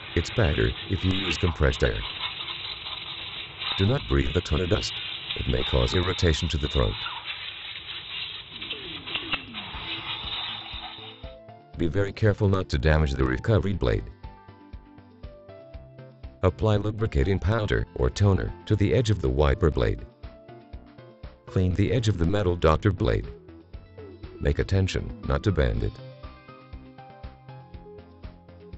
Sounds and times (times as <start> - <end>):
Speech: 0.2 - 2.0, 3.8 - 7.0, 11.8 - 14.1, 16.4 - 20.1, 21.5 - 23.3, 24.4 - 26.0.